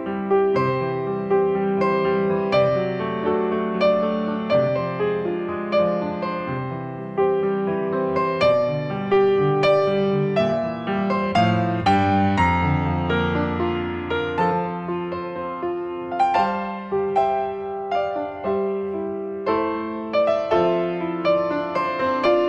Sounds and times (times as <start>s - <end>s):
Music: 0.0s - 22.4s.